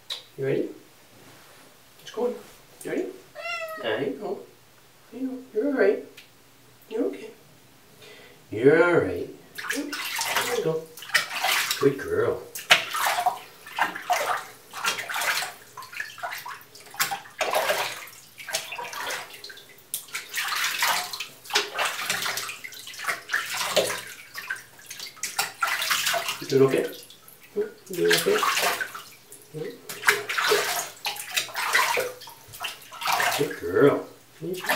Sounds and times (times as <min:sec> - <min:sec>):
Water: 0:09.4 - 0:34.7.